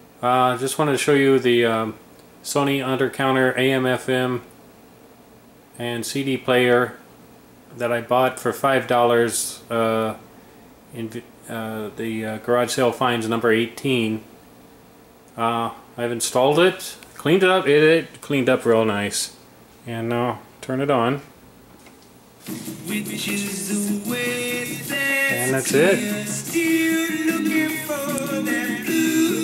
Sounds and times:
Radio: 0:22.4 - 0:26.3.

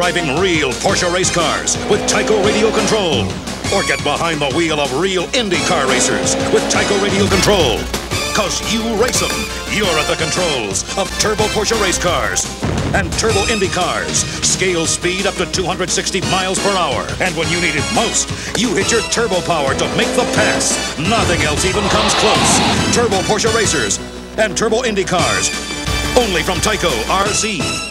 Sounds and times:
Car: 0:00.0 - 0:27.7
Music: 0:00.0 - 0:27.9
Speech: 0:00.0 - 0:27.9.

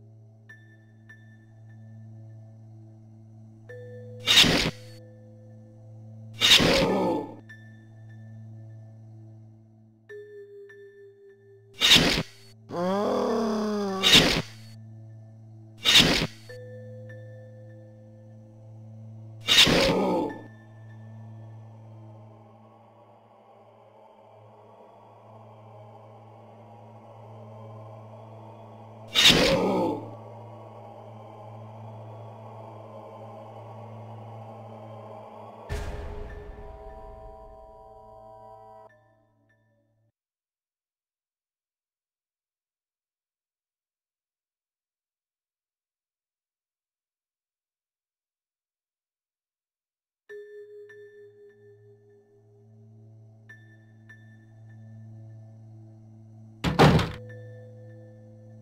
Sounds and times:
Music: 0:00.0 - 0:40.7, 0:50.3 - 0:58.6.

